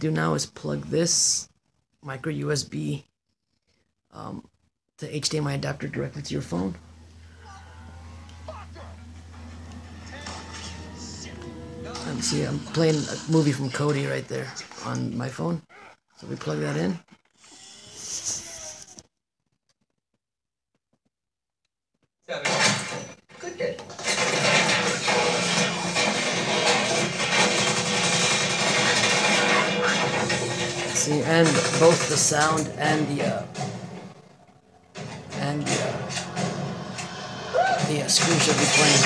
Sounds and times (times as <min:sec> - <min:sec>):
Male speech, man speaking: 0:00.0 - 0:03.1, 0:04.1 - 0:06.8, 0:11.1 - 0:17.0, 0:23.4 - 0:23.8, 0:30.9 - 0:33.6, 0:35.4 - 0:36.1, 0:37.8 - 0:39.0
Television: 0:04.2 - 0:19.0, 0:22.3 - 0:39.0.